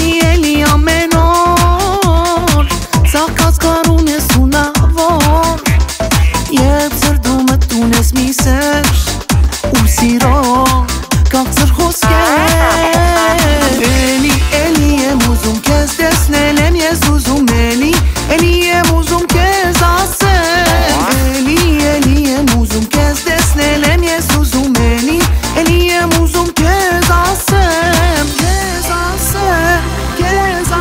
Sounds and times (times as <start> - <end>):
Music: 0.0 - 30.8.